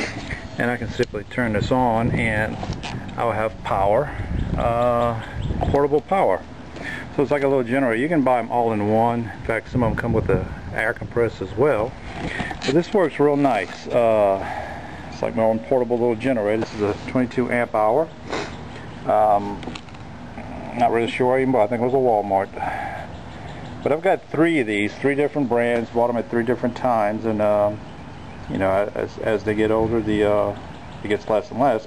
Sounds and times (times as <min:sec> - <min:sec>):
Outside, rural or natural: 0:00.0 - 0:31.8
Speech: 0:00.6 - 0:02.6, 0:03.2 - 0:06.5, 0:07.1 - 0:12.0, 0:12.6 - 0:14.5, 0:15.2 - 0:18.1, 0:19.0 - 0:19.7, 0:20.4 - 0:22.8, 0:23.8 - 0:27.8, 0:28.5 - 0:31.8.